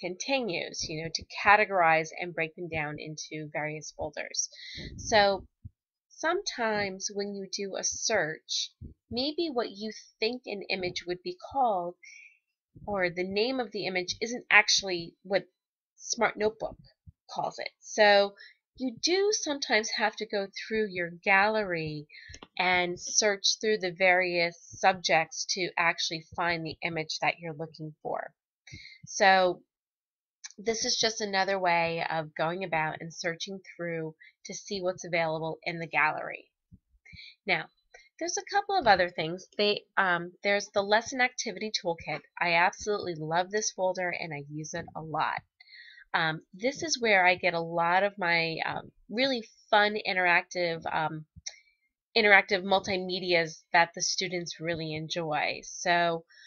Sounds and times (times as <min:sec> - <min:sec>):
Narration, monologue: 0:00.0 - 0:56.4.